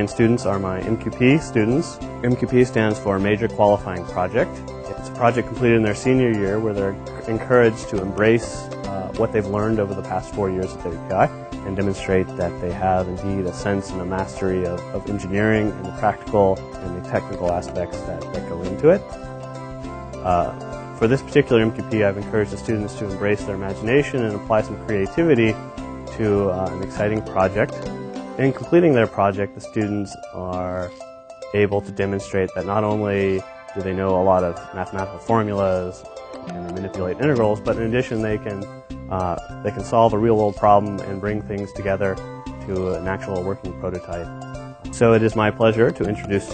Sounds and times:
Speech: 0:00.0 - 0:19.1, 0:20.2 - 0:27.8, 0:28.4 - 0:30.9, 0:31.6 - 0:44.3, 0:44.9 - 0:46.5
Music: 0:00.0 - 0:46.5.

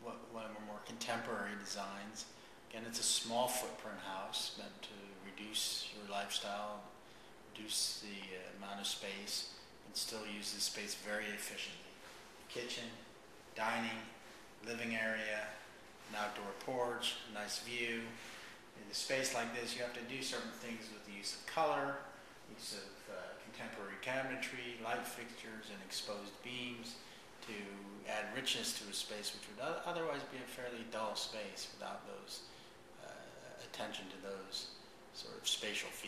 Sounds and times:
Speech: 0:00.0 - 0:36.0.

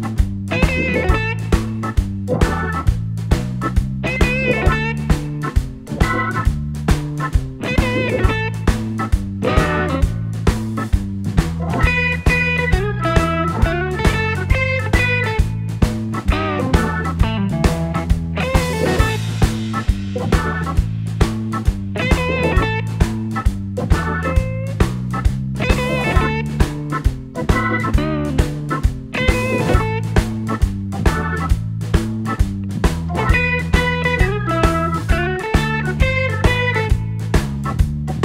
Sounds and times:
Music: 0:00.0 - 0:38.2.

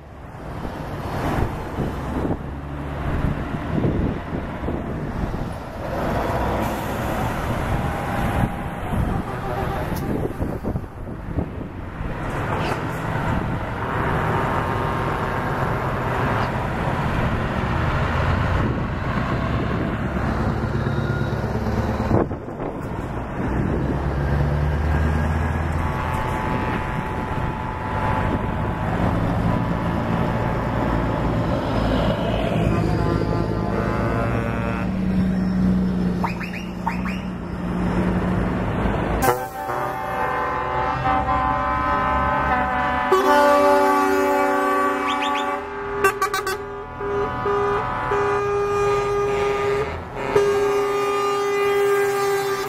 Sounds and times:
Truck: 0:00.0 - 0:52.6.

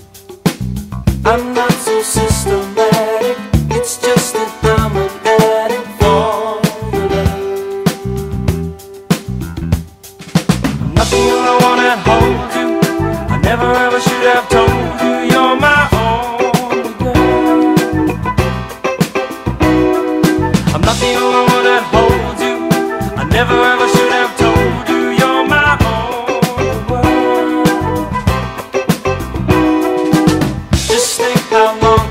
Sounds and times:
Reggae: 0:00.0 - 0:32.1
Rhythm and blues: 0:00.0 - 0:32.1.

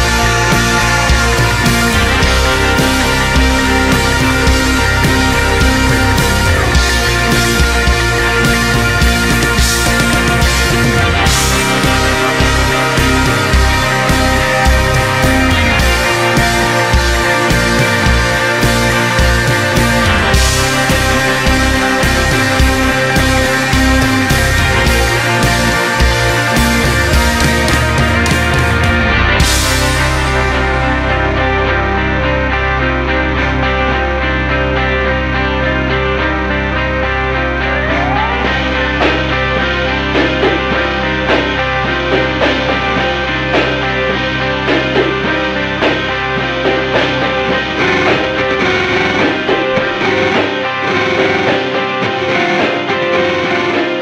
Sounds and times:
Music: 0:00.0 - 0:54.0.

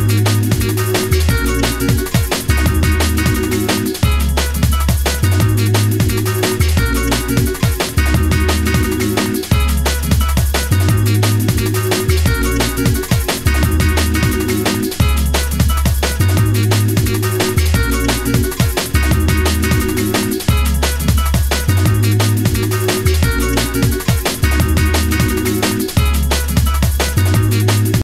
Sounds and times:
Music: 0:00.0 - 0:28.0.

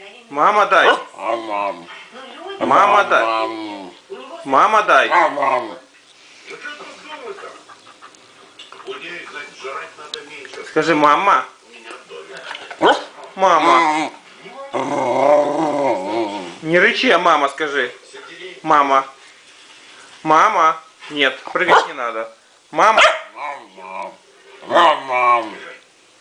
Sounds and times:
Bow-wow: 0:00.8 - 0:01.5, 0:12.8 - 0:13.8, 0:21.7 - 0:22.0, 0:22.8 - 0:23.7, 0:24.7 - 0:25.5.

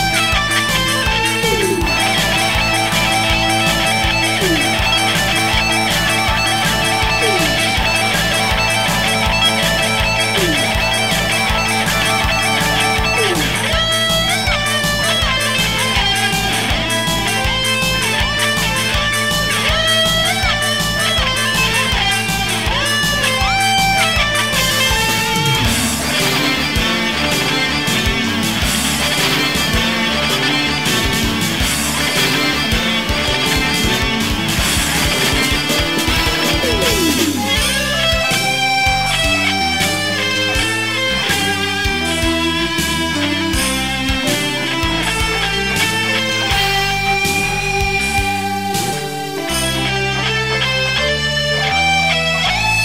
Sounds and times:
Bass guitar: 0:00.0 - 0:52.8.

